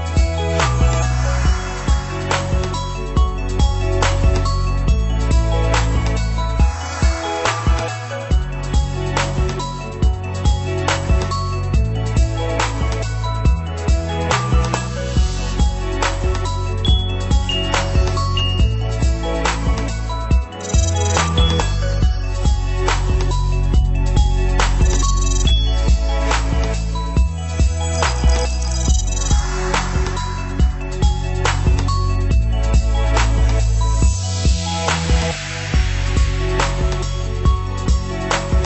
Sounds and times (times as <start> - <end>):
Music: 0.0 - 38.6.